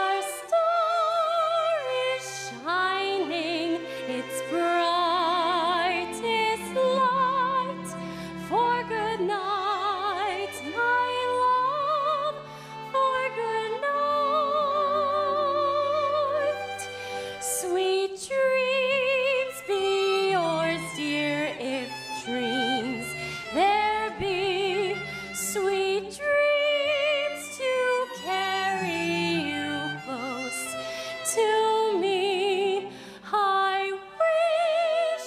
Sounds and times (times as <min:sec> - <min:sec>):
Music: 0:00.0 - 0:35.2.